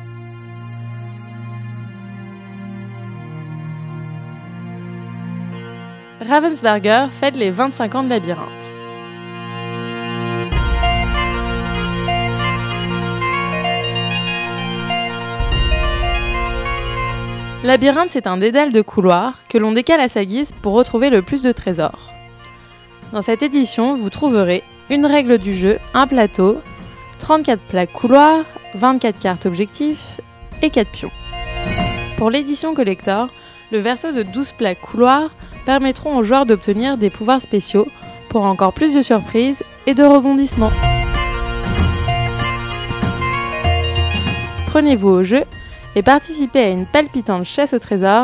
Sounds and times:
Music: 0.0 - 48.2
Speech: 6.2 - 8.7, 17.6 - 22.0, 23.1 - 26.6, 27.2 - 31.1, 32.2 - 40.8, 44.8 - 48.2.

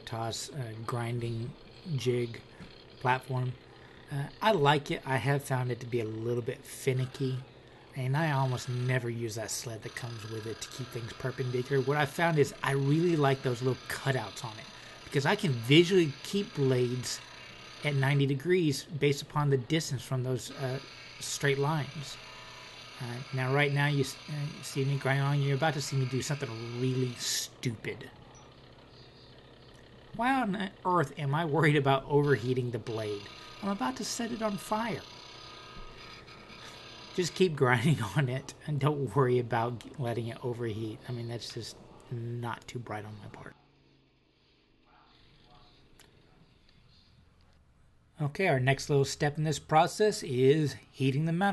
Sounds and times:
Speech: 0.0 - 17.2, 17.8 - 22.2, 23.0 - 28.2, 30.2 - 35.1, 37.2 - 43.6, 48.2 - 51.5.

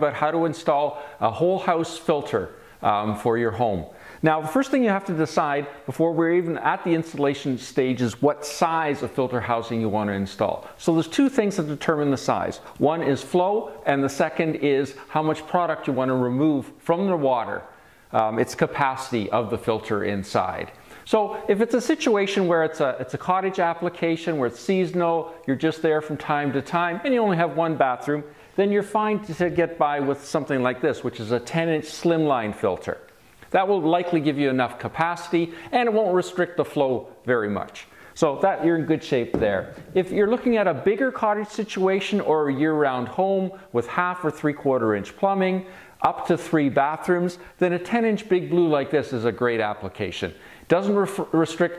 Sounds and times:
Speech: 0.0 - 51.7.

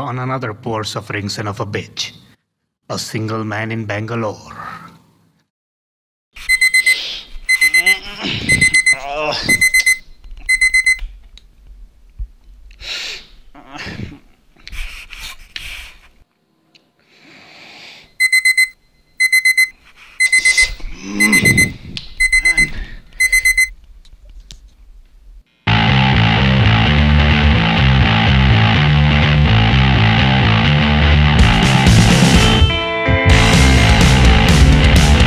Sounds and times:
Music: 25.7 - 35.2.

